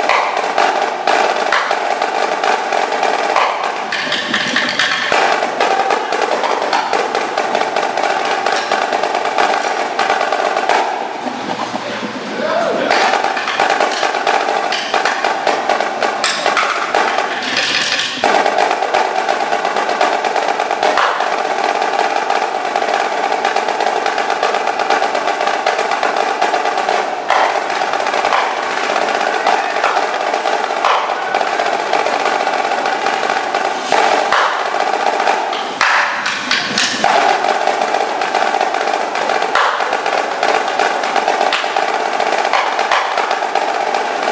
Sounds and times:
Snare drum: 0.0s - 44.3s.

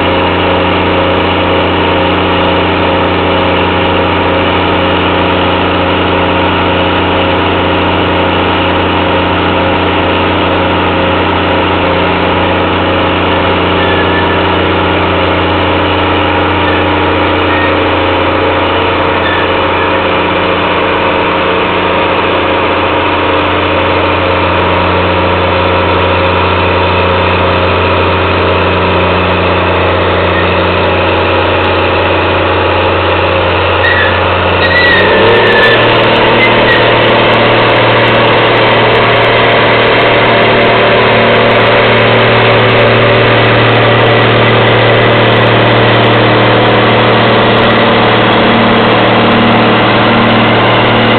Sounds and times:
Vehicle: 0.0s - 51.1s.

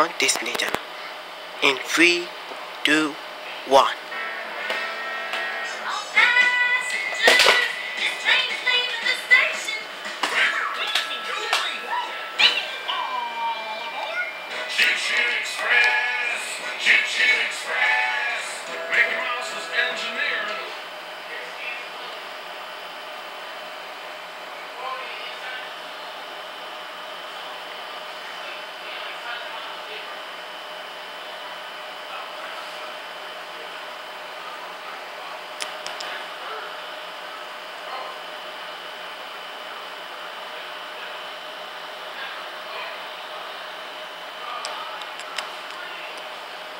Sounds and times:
Speech: 0.0s - 0.8s, 1.6s - 4.0s, 24.6s - 25.8s, 27.3s - 30.4s, 32.0s - 32.9s, 42.1s - 46.3s.

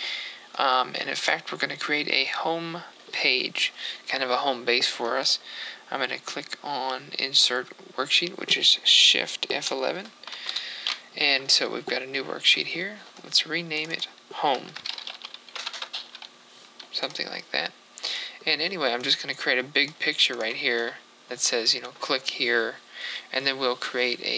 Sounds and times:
Computer keyboard: 14.7s - 17.2s.

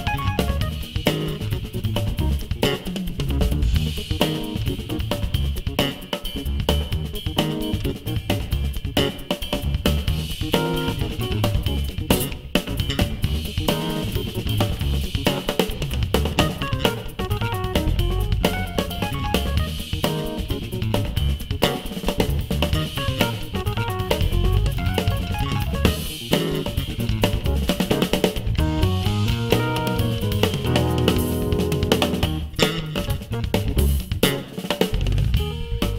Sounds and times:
Bass drum: 0.0s - 5.8s, 6.4s - 35.9s
Drum kit: 0.0s - 35.9s.

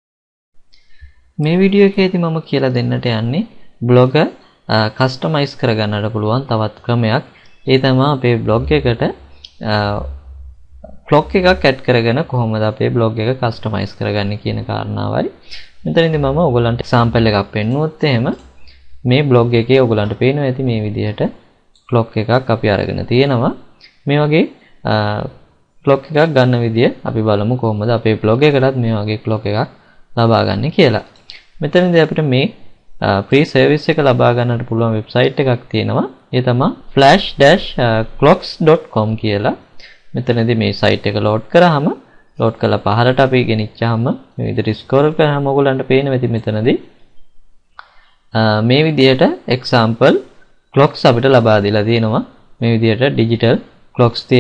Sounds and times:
Speech: 1.4s - 46.9s, 47.8s - 54.4s.

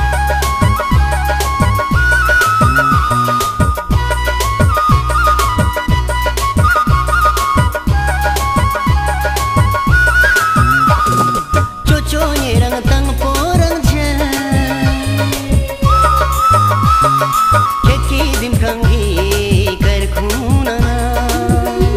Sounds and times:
Music: 0.0s - 21.9s.

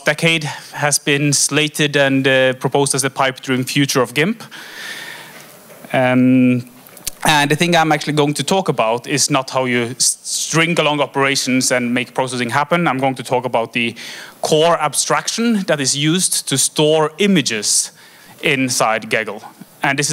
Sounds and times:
Speech: 0.0s - 4.5s, 5.9s - 20.1s.

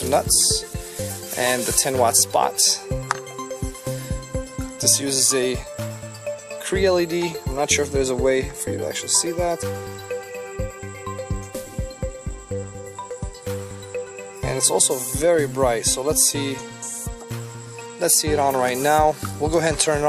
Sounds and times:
Speech: 0.0s - 0.7s, 1.3s - 2.9s, 4.8s - 5.7s, 6.6s - 9.7s, 14.4s - 17.1s, 18.0s - 20.0s
Music: 0.0s - 20.0s.

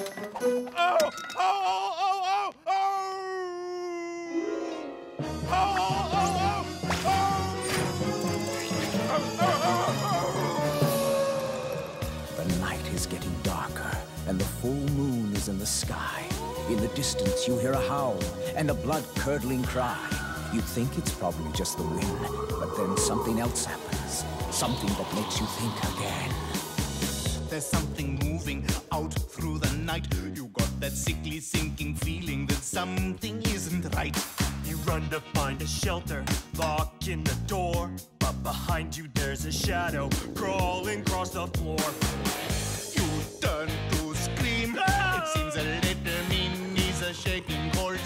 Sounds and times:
Music: 0.0s - 1.2s, 4.1s - 48.0s
Speech: 12.4s - 26.4s, 27.5s - 35.9s.

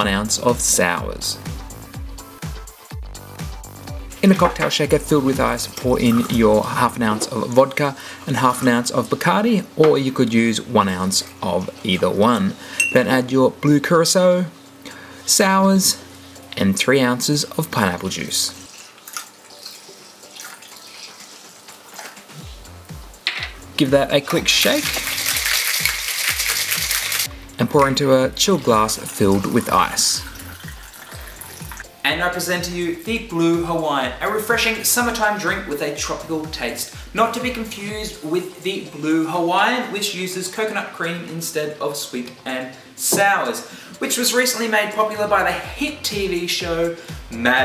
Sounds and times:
Speech: 0.0s - 1.4s, 4.2s - 14.6s, 15.3s - 16.0s, 16.6s - 18.6s, 23.8s - 25.0s, 27.6s - 30.3s, 32.0s - 47.6s.

